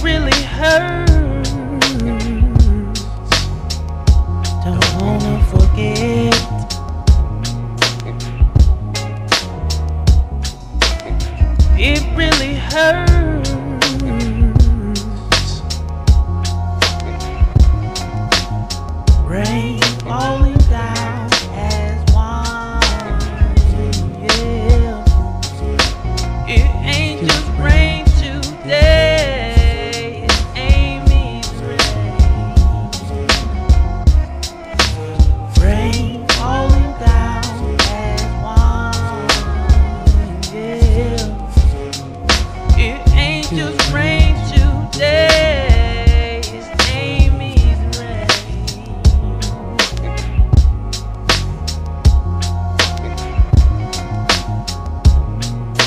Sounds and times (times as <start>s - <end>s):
Music: 0.0s - 55.8s.